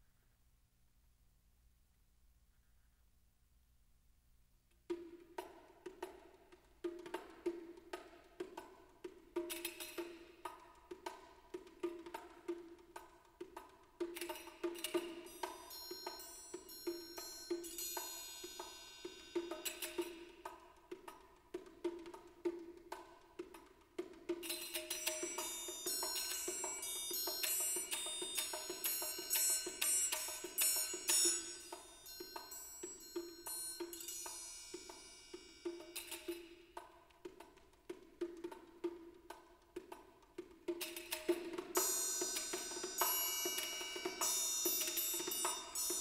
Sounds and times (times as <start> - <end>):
Music: 4.7 - 46.0.